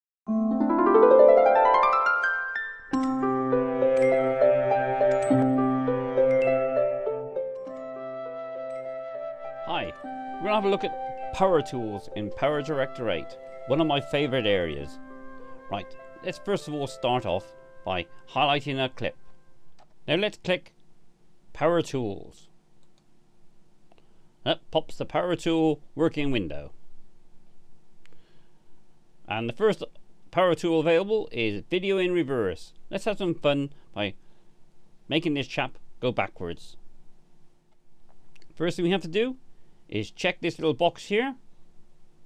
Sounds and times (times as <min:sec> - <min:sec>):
Music: 0:00.3 - 0:19.7
Speech: 0:09.7 - 0:14.9, 0:15.7 - 0:19.2, 0:20.1 - 0:20.8, 0:21.5 - 0:22.5, 0:24.4 - 0:26.7, 0:29.3 - 0:34.2, 0:35.1 - 0:36.8, 0:38.6 - 0:41.4.